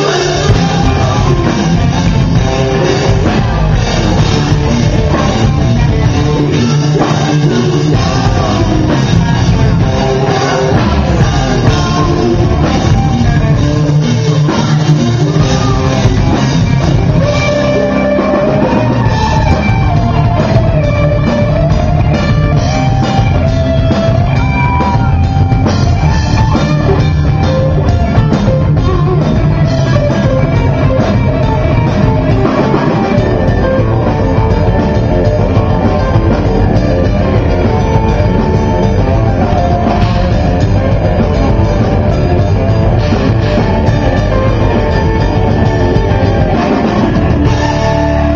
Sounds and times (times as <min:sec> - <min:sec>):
Progressive rock: 0:00.0 - 0:48.3.